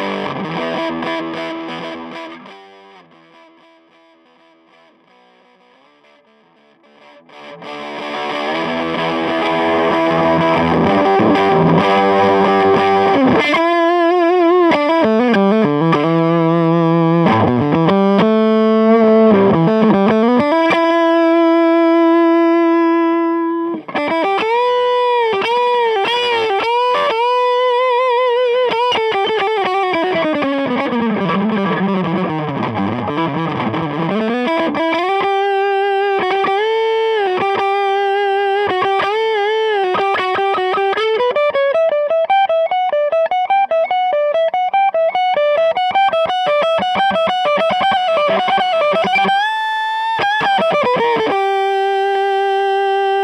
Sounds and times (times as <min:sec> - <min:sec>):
Music: 0:00.0 - 0:53.2.